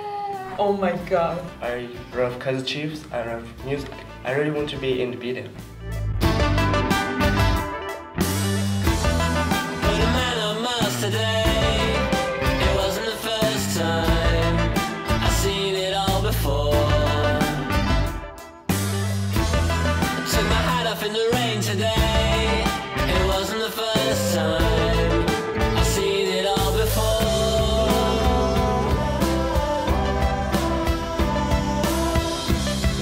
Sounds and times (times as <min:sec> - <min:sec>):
Rock music: 0:00.4 - 0:33.0.